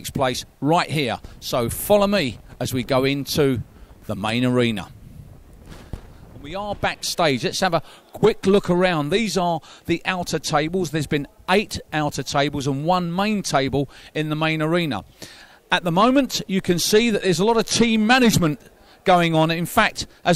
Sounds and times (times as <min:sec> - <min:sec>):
Speech: 0:00.0 - 0:04.9, 0:06.4 - 0:15.0, 0:15.7 - 0:20.3.